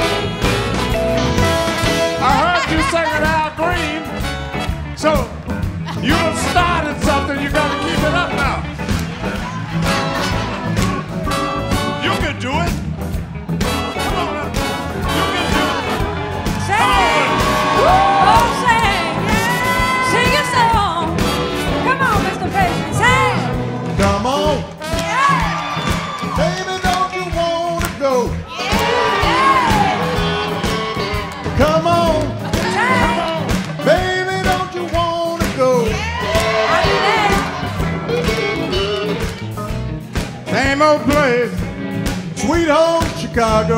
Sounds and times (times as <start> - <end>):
Rock and roll: 0.0 - 43.7.